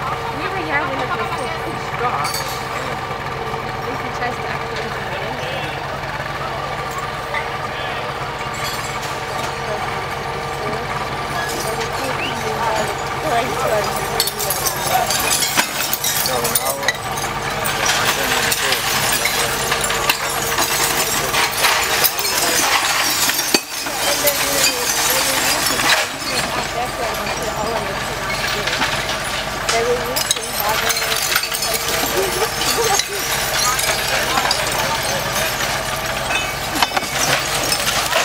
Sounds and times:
Speech: 0.0 - 3.0, 9.4 - 15.5, 16.1 - 17.0, 17.6 - 20.0, 20.6 - 22.8, 23.8 - 35.6
Vehicle: 0.0 - 38.2.

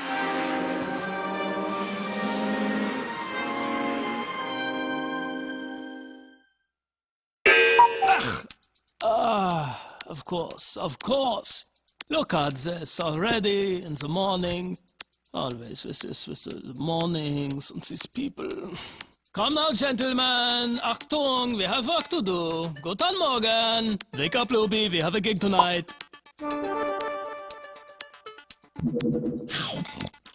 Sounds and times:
Music: 0.0 - 6.7, 8.4 - 30.3
Speech: 9.0 - 25.9, 29.5 - 30.1.

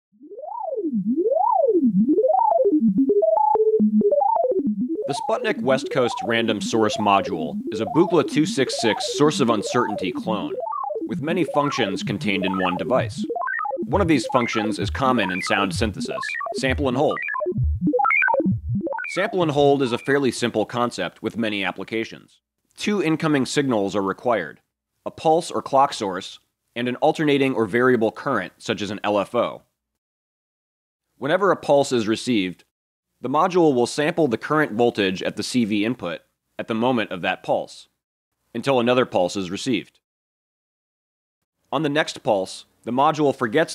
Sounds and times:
Synthesizer: 0.4 - 20.2
Speech: 5.1 - 13.2, 13.9 - 17.2, 19.1 - 29.7, 31.2 - 37.9, 38.6 - 40.0, 41.7 - 43.7.

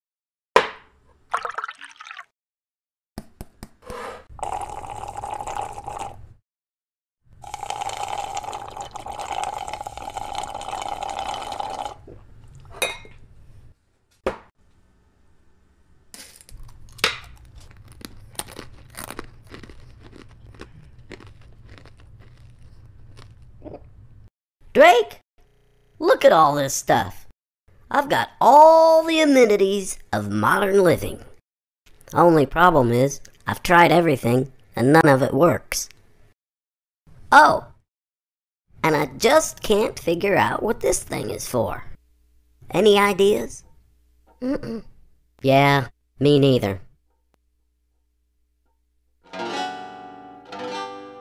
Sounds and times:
Crunch: 16.2 - 23.8.

